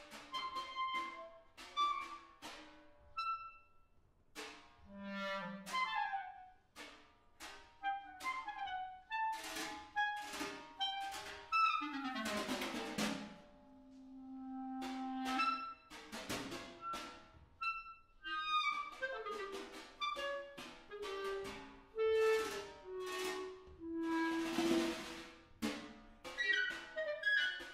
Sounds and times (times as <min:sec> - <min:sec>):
Clarinet: 0:00.0 - 0:02.4, 0:03.1 - 0:03.7, 0:04.9 - 0:06.6, 0:07.8 - 0:15.9, 0:16.8 - 0:27.7.